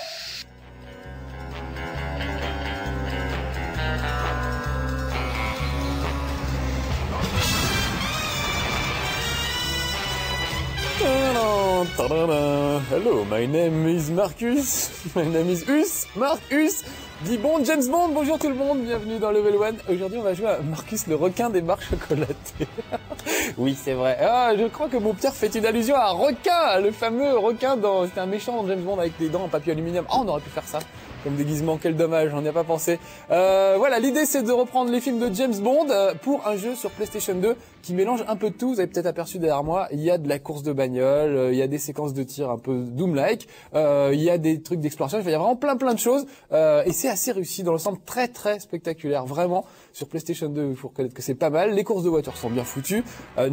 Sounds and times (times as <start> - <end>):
Music: 0.0 - 53.5
Speech: 11.0 - 22.4, 23.6 - 53.5.